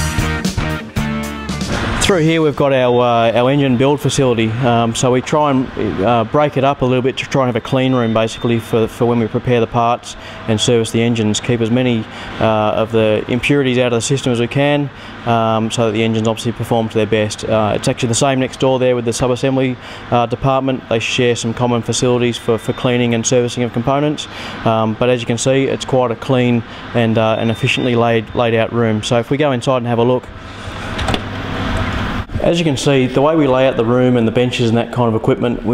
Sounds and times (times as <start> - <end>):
Speech: 2.0 - 30.3, 32.3 - 35.7.